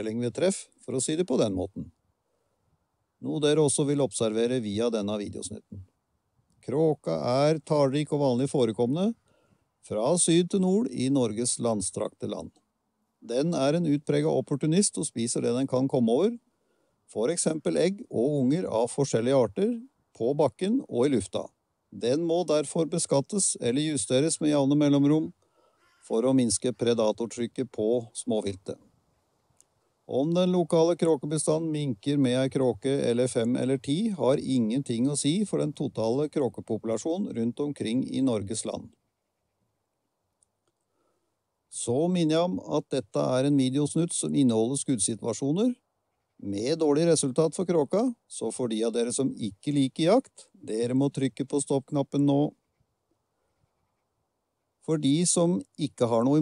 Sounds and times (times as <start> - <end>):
Speech: 0.0 - 2.0, 3.2 - 5.9, 6.6 - 9.2, 9.8 - 12.6, 13.2 - 16.4, 17.1 - 25.4, 26.1 - 28.8, 30.1 - 39.0, 41.7 - 45.8, 46.4 - 52.6, 54.8 - 56.4.